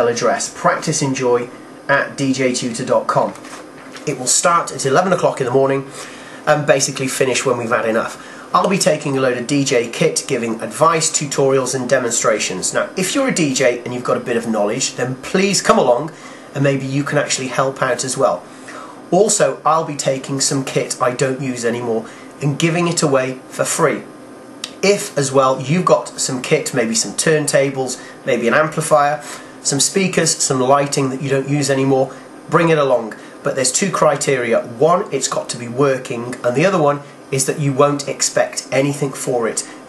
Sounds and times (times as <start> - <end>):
Speech: 0.0 - 18.5, 19.1 - 39.8.